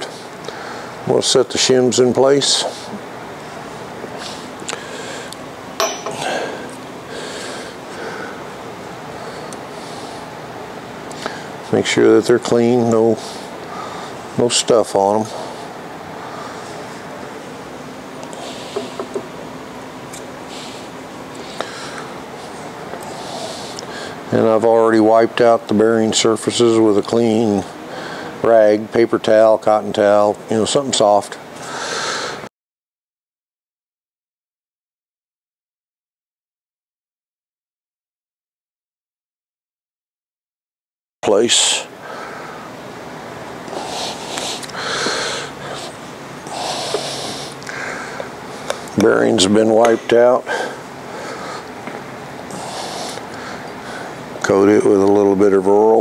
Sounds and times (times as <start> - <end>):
Speech: 1.1 - 2.8, 11.7 - 13.2, 14.4 - 15.4, 24.3 - 27.7, 28.4 - 31.4, 41.2 - 41.9, 49.0 - 50.6, 54.4 - 56.0.